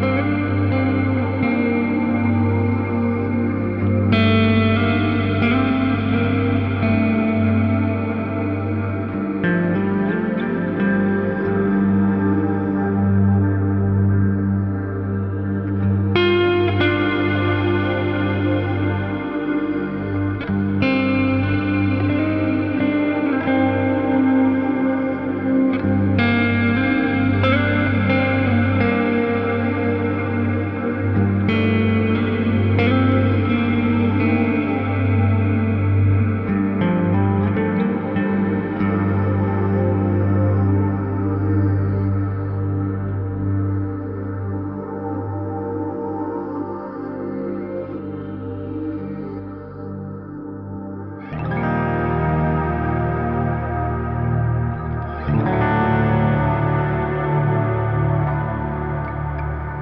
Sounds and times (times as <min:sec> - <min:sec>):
Music: 0:00.0 - 0:59.8.